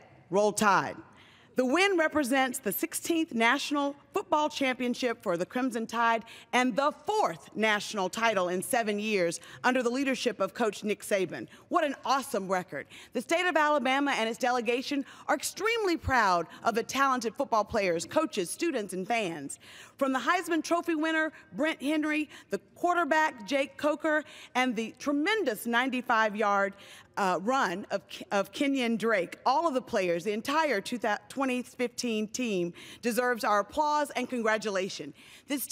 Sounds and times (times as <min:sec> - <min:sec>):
Narration, monologue: 0:00.0 - 0:35.7
Female speech, woman speaking: 0:00.3 - 0:01.0, 0:01.6 - 0:22.2, 0:22.8 - 0:35.7.